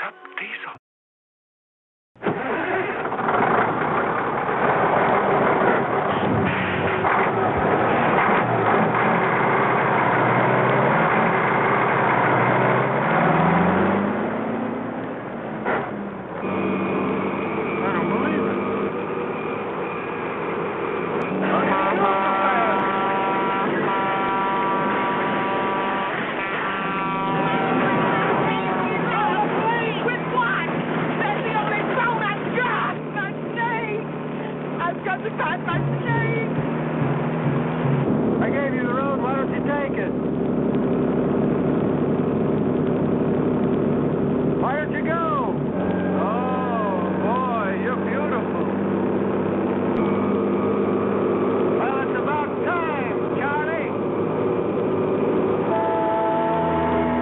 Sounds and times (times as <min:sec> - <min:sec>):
Speech: 0:00.0 - 0:00.8, 0:17.8 - 0:18.5, 0:21.4 - 0:22.8, 0:28.4 - 0:34.0, 0:34.8 - 0:36.5, 0:38.4 - 0:40.2, 0:44.6 - 0:48.7, 0:51.8 - 0:54.0
Vehicle: 0:02.2 - 0:57.2.